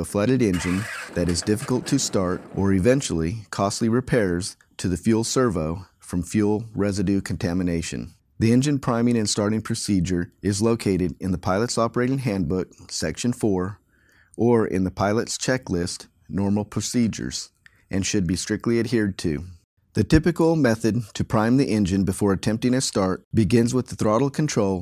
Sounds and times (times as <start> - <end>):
Speech: 0.0 - 13.8, 14.4 - 24.8.